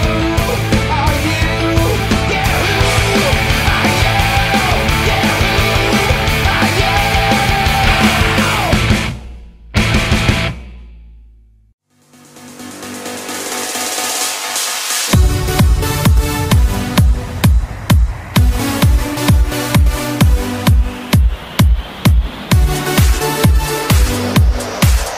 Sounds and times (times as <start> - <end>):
Electronic dance music: 2.3 - 9.2, 11.9 - 25.1.